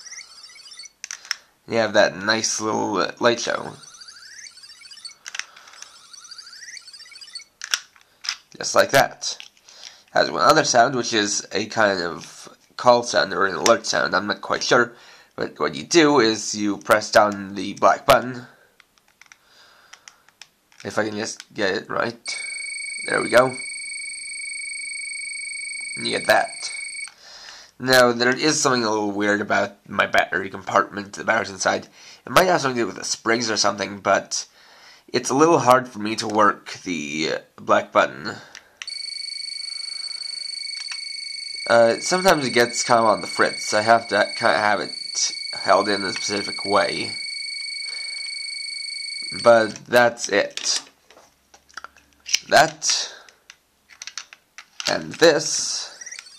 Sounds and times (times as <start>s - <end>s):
Inside, small room: 0.0s - 56.3s
Speech: 1.7s - 3.8s, 8.6s - 9.4s, 10.1s - 18.6s, 20.8s - 22.4s, 23.1s - 23.6s, 26.0s - 26.8s, 27.8s - 34.5s, 35.1s - 38.5s, 41.7s - 47.2s, 49.3s - 50.9s, 52.3s - 53.3s, 54.9s - 56.0s.